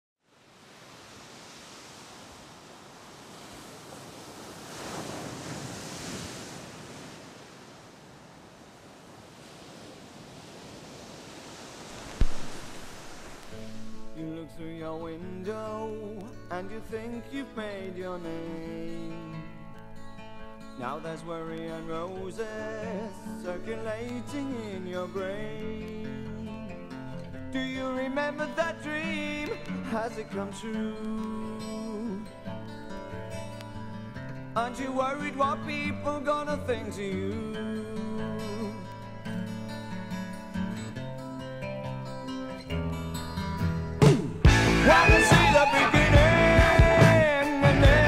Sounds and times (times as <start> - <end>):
Rustle: 0.2 - 14.3.